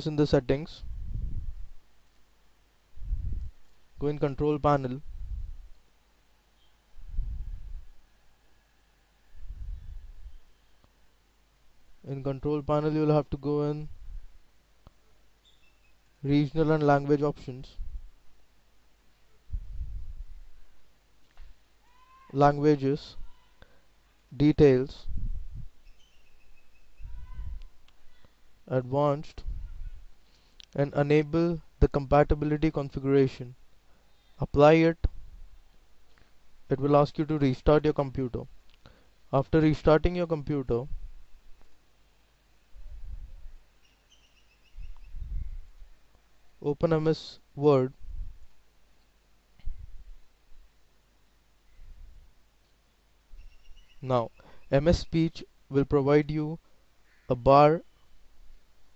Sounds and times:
Speech: 0:00.0 - 0:00.8, 0:04.0 - 0:05.0, 0:12.1 - 0:13.9, 0:16.2 - 0:17.8, 0:22.3 - 0:23.5, 0:24.4 - 0:25.1, 0:28.7 - 0:29.4, 0:30.8 - 0:33.6, 0:34.4 - 0:35.1, 0:36.7 - 0:38.5, 0:39.3 - 0:40.9, 0:46.6 - 0:48.0, 0:54.0 - 0:56.6, 0:57.3 - 0:57.8.

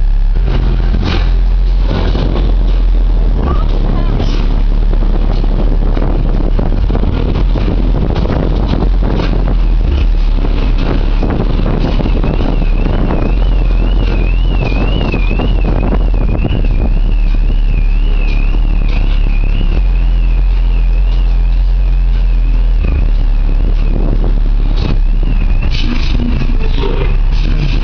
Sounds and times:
Car: 0:00.0 - 0:27.8
Speech: 0:03.2 - 0:04.5, 0:25.7 - 0:27.8.

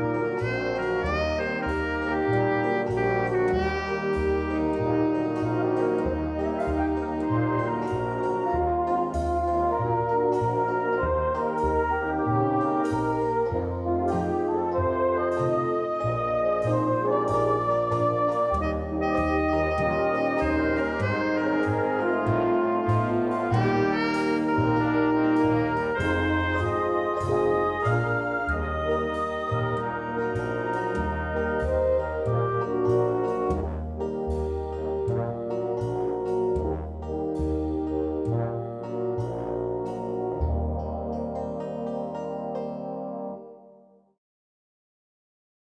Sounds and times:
Brass instrument: 0:00.0 - 0:44.1.

